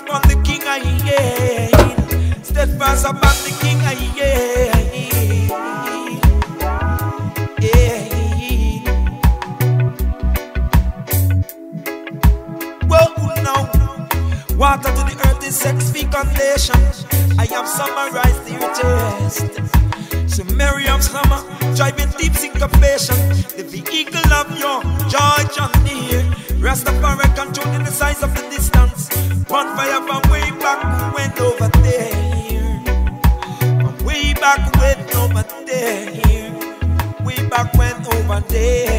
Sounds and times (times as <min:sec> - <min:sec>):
Music: 0:00.0 - 0:38.9.